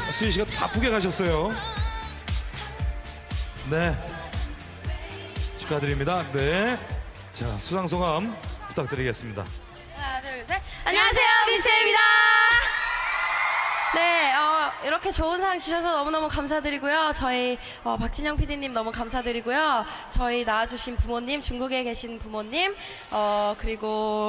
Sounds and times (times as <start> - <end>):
Theme music: 0.0 - 12.0.